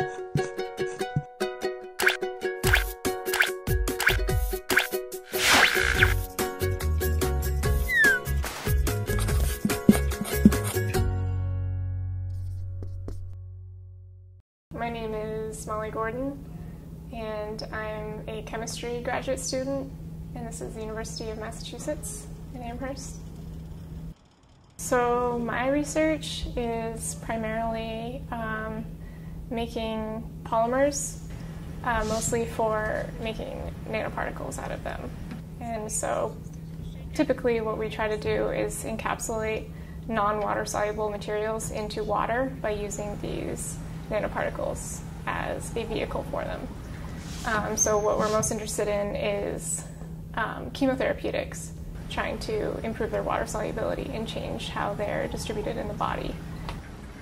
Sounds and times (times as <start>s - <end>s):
Speech: 14.7s - 16.4s, 17.1s - 23.2s, 24.8s - 28.9s, 29.5s - 31.2s, 31.8s - 36.4s, 37.2s - 46.7s, 47.4s - 56.4s.